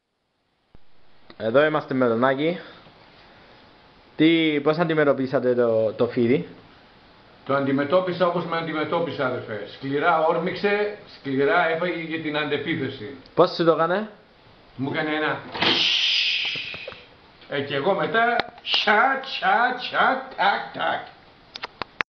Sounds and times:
Inside, small room: 0.0 - 22.0
Speech: 1.4 - 2.8, 4.2 - 6.6, 7.5 - 14.2, 14.8 - 15.5, 17.5 - 21.2.

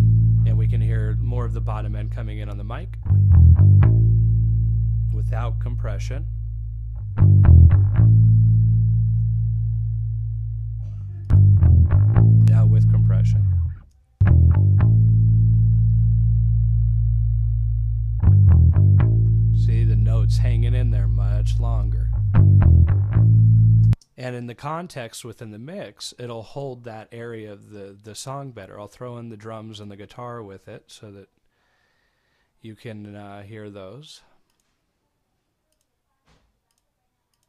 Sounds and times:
Bass guitar: 0.0 - 24.0
Speech: 0.4 - 3.0, 5.1 - 6.3, 12.4 - 13.5, 19.6 - 22.1, 24.2 - 31.3, 32.6 - 34.4.

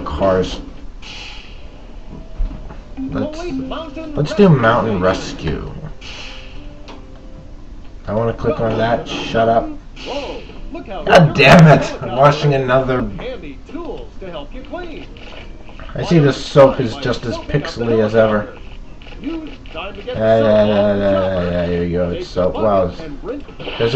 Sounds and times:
Speech: 3.1 - 5.9, 8.1 - 15.1, 15.9 - 18.6, 19.2 - 23.9.

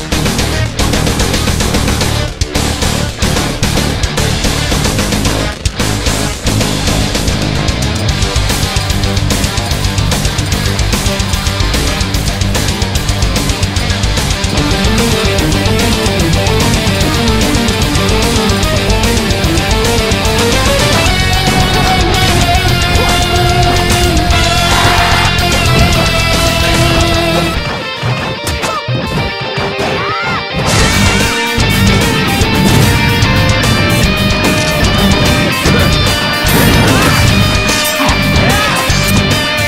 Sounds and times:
Music: 0.0 - 39.6.

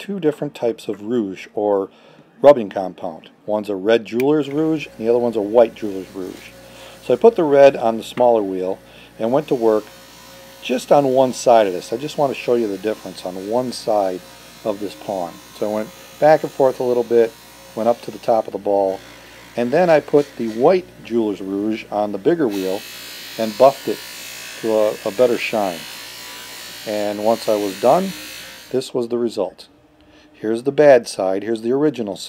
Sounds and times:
Speech: 0.0 - 9.8, 10.6 - 19.0, 19.6 - 22.8, 23.4 - 24.0, 24.6 - 25.9, 26.8 - 29.7, 30.4 - 32.2.

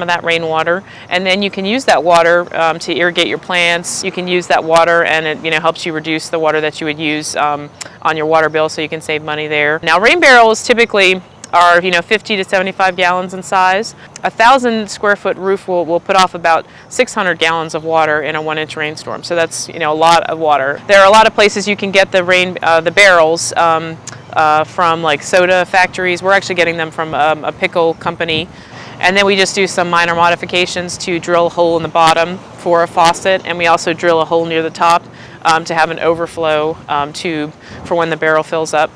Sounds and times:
Speech: 0.0 - 38.9.

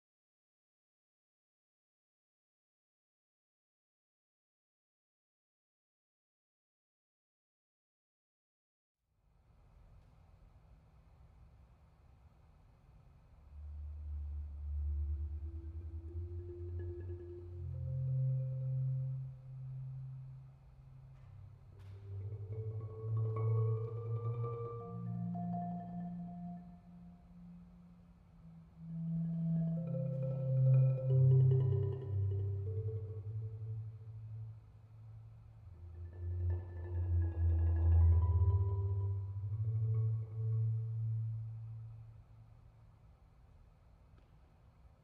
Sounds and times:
Glockenspiel: 13.6 - 34.6, 35.7 - 42.1
Marimba, xylophone: 14.2 - 20.4, 21.1 - 34.6, 35.7 - 42.1.

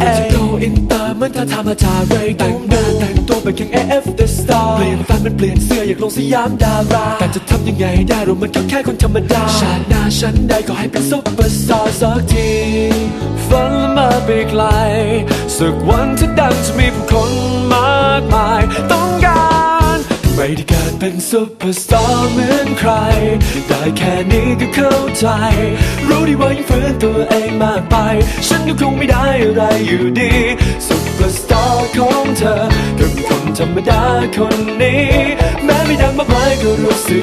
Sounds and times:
Music: 0.0 - 37.2.

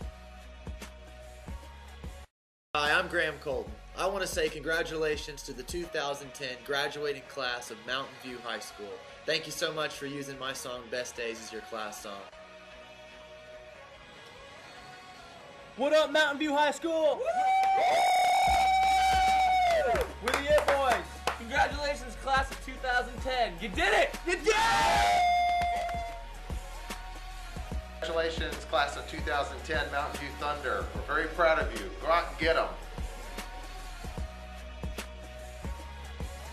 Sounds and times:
Music: 0.0 - 36.5
Speech: 2.8 - 12.3, 15.8 - 17.2, 20.2 - 24.6, 28.0 - 32.8
Bellow: 17.2 - 20.0, 24.5 - 26.2
Whoop: 17.2 - 20.1, 24.5 - 26.2.

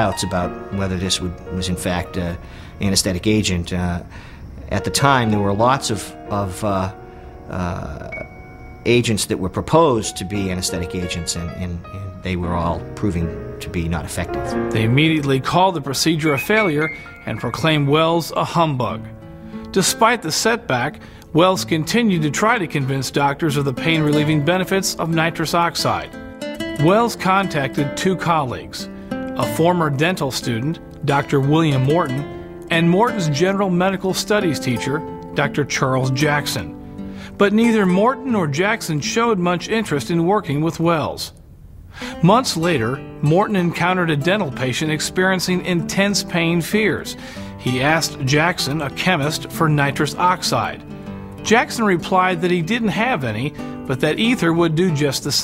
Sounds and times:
Speech: 0.0 - 4.1, 4.7 - 8.2, 8.9 - 19.1, 19.7 - 26.1, 26.8 - 36.7, 37.4 - 41.4, 42.2 - 50.8, 51.4 - 55.4
Music: 0.0 - 41.1, 42.0 - 55.4.

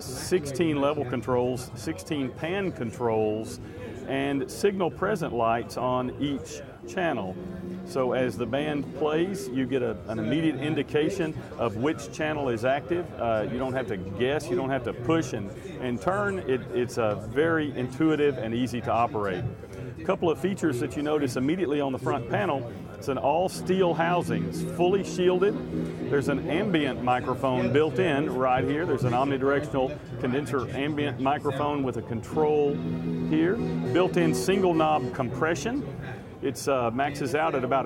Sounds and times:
Music: 0.0 - 37.8
Speech: 0.0 - 37.8.

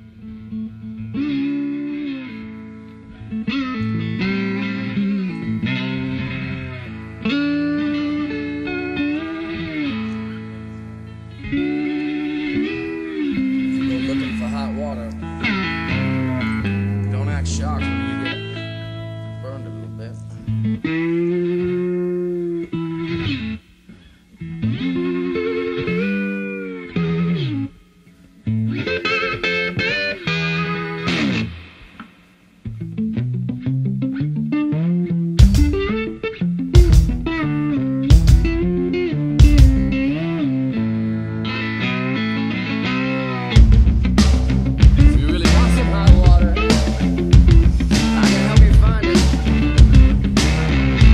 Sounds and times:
Music: 0.0 - 51.1
Speech: 12.8 - 15.2, 15.9 - 18.4, 19.4 - 20.4, 45.0 - 46.9, 48.0 - 49.3.

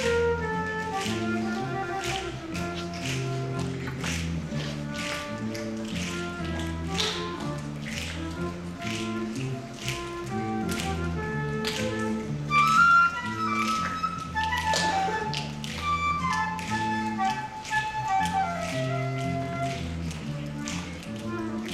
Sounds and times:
Flute: 0.0 - 21.7.

